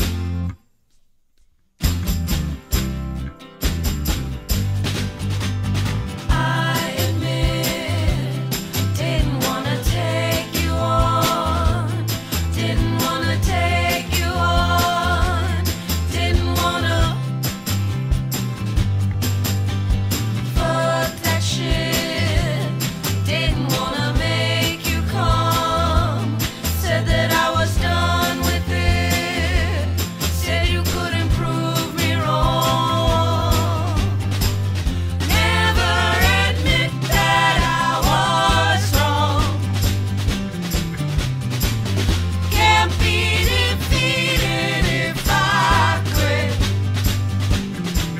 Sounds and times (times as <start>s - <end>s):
Music: 0.0s - 1.0s, 1.7s - 48.1s.